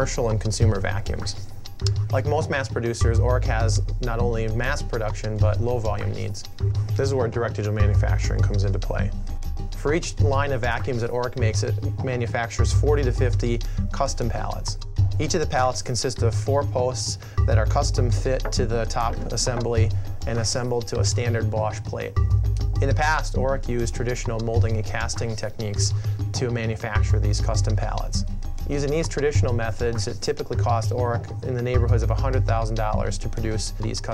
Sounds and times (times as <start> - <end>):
Speech: 0.0 - 1.4, 2.1 - 9.2, 9.8 - 22.2, 22.8 - 34.1
Music: 0.0 - 34.1.